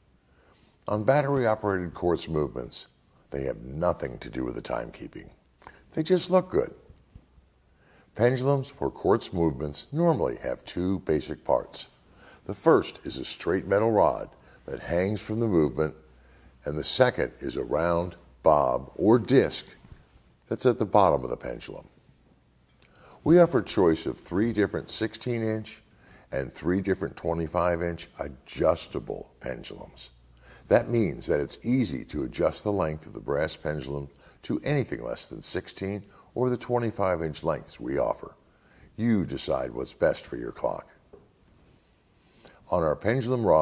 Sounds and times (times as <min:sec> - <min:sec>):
Speech: 0:00.8 - 0:06.9, 0:08.2 - 0:19.9, 0:20.5 - 0:22.0, 0:23.2 - 0:38.4, 0:39.0 - 0:41.0, 0:42.6 - 0:43.6.